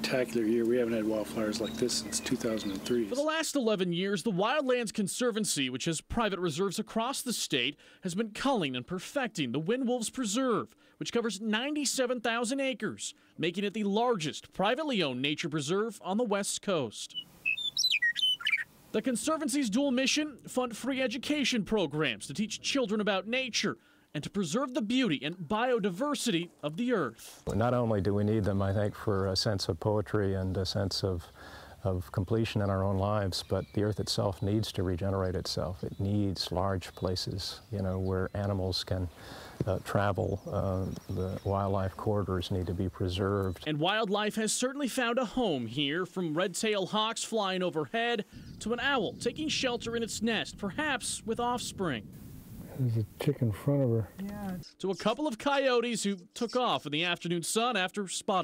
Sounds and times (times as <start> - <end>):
Speech: 0.0 - 17.2, 19.0 - 52.0, 52.7 - 58.4.